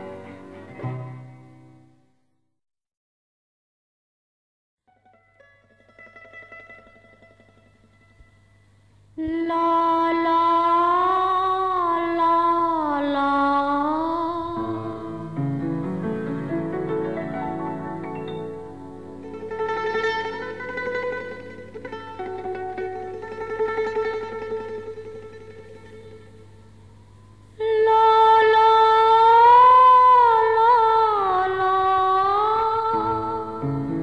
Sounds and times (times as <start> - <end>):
Music: 0.0 - 2.4, 4.8 - 34.0.